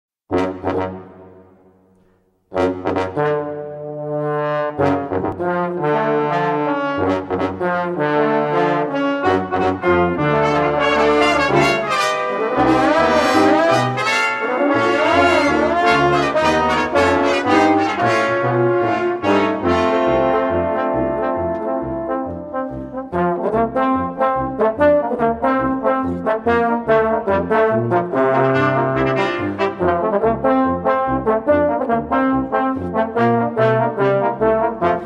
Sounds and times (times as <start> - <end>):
Trombone: 0.3 - 1.5, 2.5 - 35.0
Trumpet: 0.3 - 1.7, 2.5 - 35.0.